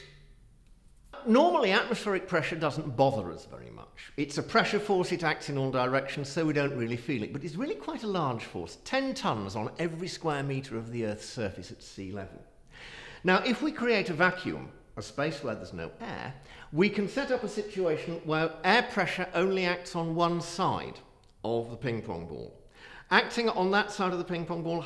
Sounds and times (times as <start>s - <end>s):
Speech: 1.2s - 12.5s, 13.2s - 24.8s.